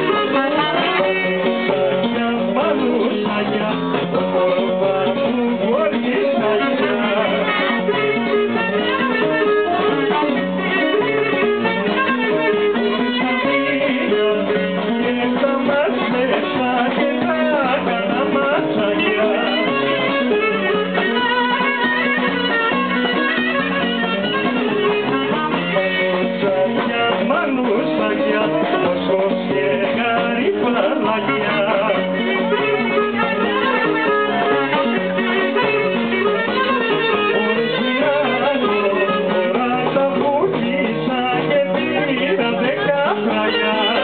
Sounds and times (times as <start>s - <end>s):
Musical instrument: 0.0s - 44.0s.